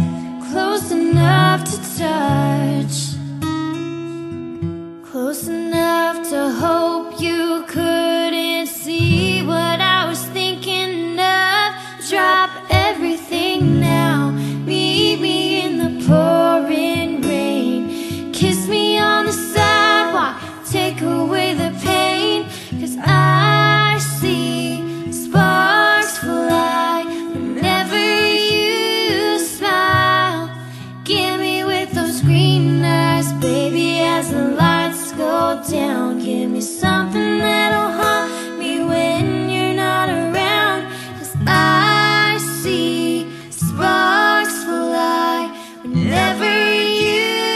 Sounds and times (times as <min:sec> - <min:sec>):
Music: 0:00.0 - 0:47.5.